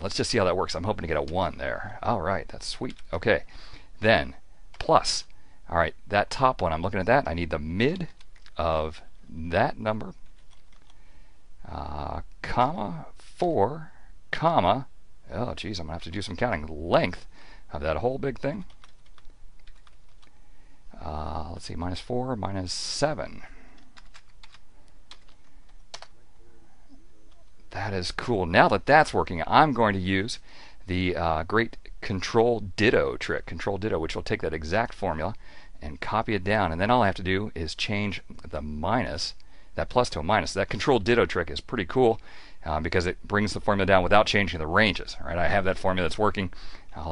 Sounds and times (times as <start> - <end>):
Speech: 0.0 - 10.2, 11.6 - 18.7, 20.9 - 23.5, 27.7 - 47.1
Computer keyboard: 7.9 - 8.6, 10.2 - 11.0, 18.6 - 20.4, 23.8 - 26.2.